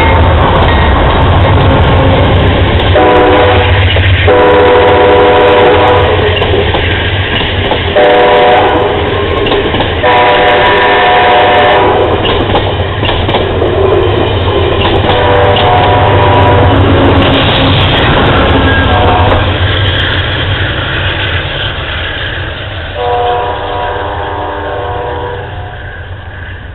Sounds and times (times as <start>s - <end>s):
Railroad car, train wagon: 0.0s - 26.7s
Train: 0.0s - 26.7s.